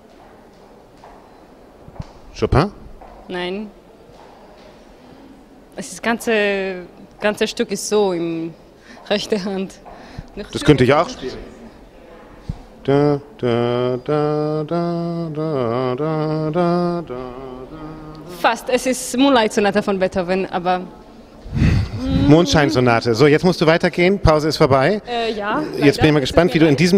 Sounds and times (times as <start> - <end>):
Speech: 10.5 - 12.2.